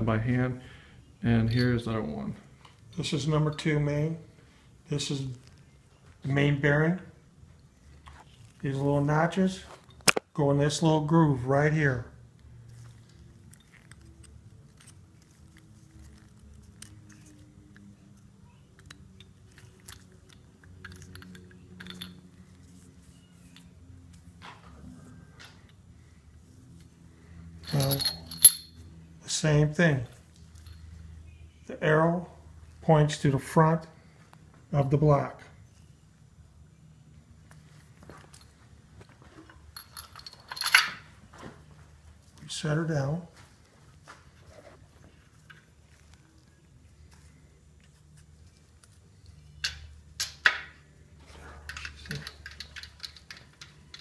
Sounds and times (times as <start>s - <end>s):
Speech: 1.2s - 2.4s, 3.0s - 4.3s, 4.9s - 5.4s, 6.2s - 7.2s, 8.6s - 9.7s, 10.4s - 12.2s, 29.3s - 30.2s, 31.7s - 34.0s, 34.7s - 35.5s, 42.4s - 43.4s.